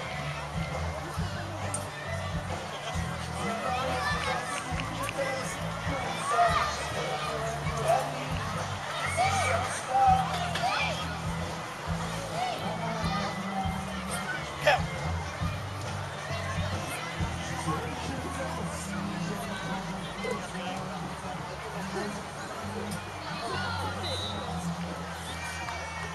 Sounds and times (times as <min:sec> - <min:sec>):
Music: 0:00.0 - 0:26.1
Speech: 0:00.0 - 0:26.1.